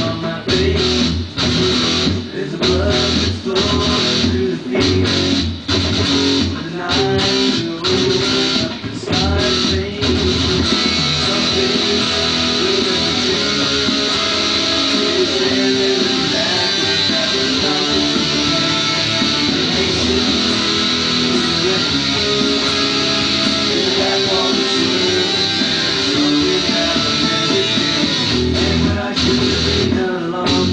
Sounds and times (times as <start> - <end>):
Guitar: 0.0 - 30.7.